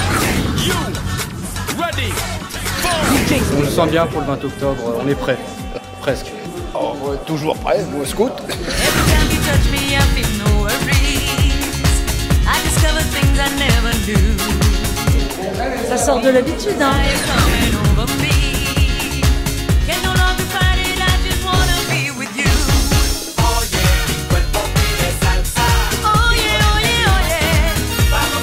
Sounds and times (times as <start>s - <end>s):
Music: 0.0s - 28.4s
Speech: 2.8s - 8.7s.